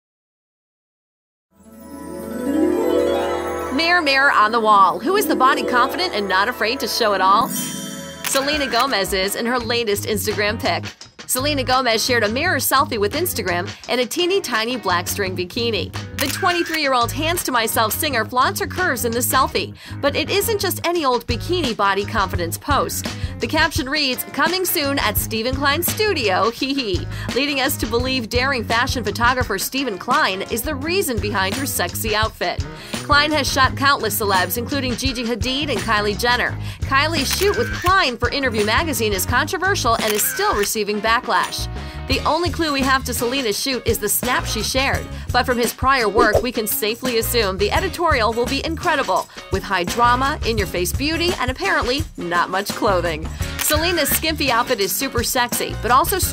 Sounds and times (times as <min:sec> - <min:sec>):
Music: 0:01.5 - 0:56.3
Speech: 0:03.7 - 0:07.6, 0:08.3 - 0:56.3.